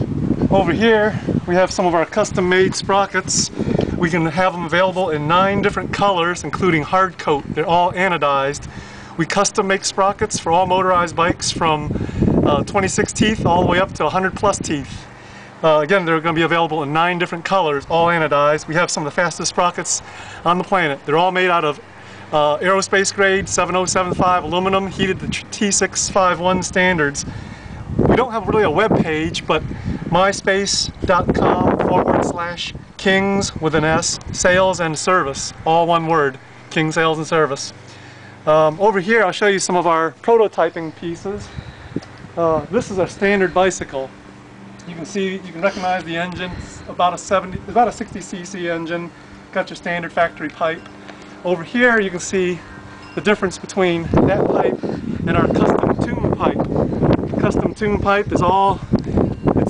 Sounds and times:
Speech: 0:00.5 - 0:21.8, 0:22.4 - 0:27.3, 0:28.1 - 0:37.8, 0:38.5 - 0:41.5, 0:42.4 - 0:44.1, 0:44.8 - 0:50.8, 0:51.4 - 0:52.6, 0:53.2 - 0:56.6, 0:57.4 - 0:58.8.

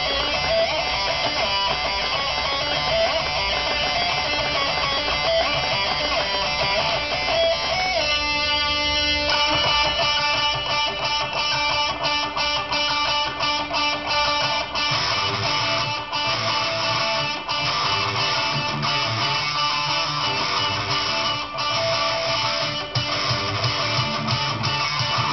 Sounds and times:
Electric guitar: 0:00.0 - 0:25.3.

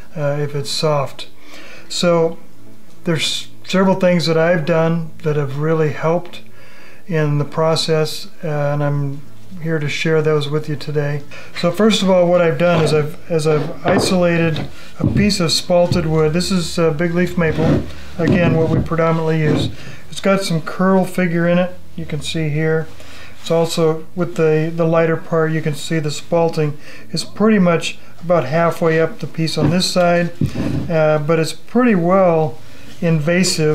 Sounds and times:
Speech: 0:00.2 - 0:02.4, 0:03.0 - 0:06.5, 0:07.1 - 0:33.7.

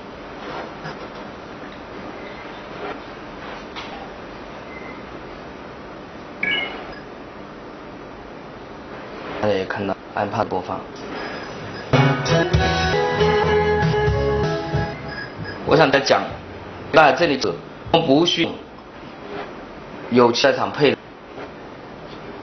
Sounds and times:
Speech: 0:09.4 - 0:10.9, 0:15.7 - 0:18.7, 0:20.1 - 0:21.0
Music: 0:12.0 - 0:15.3.

